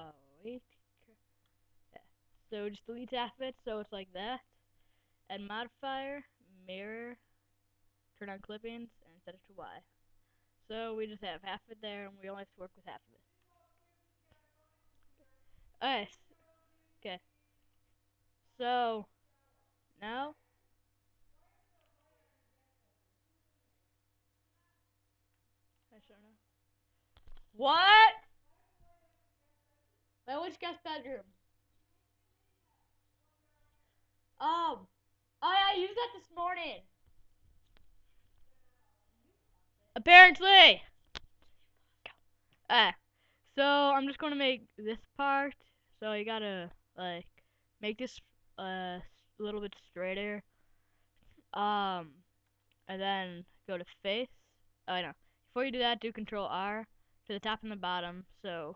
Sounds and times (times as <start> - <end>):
Speech: 0.0 - 1.2, 2.0 - 4.4, 5.3 - 7.2, 8.2 - 9.9, 10.7 - 13.2, 15.8 - 16.3, 18.6 - 19.1, 20.0 - 20.4, 27.6 - 28.2, 30.3 - 31.3, 34.4 - 36.8, 40.0 - 40.9, 42.7 - 43.0, 43.6 - 50.4, 51.5 - 52.2, 52.9 - 54.3, 54.9 - 58.7.